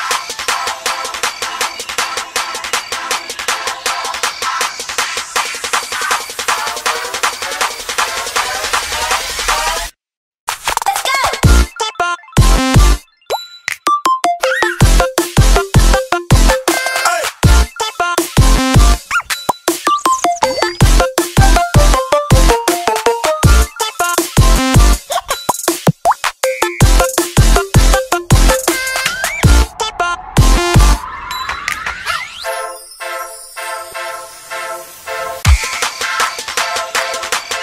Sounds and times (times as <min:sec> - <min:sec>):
Music: 0:00.0 - 0:37.6.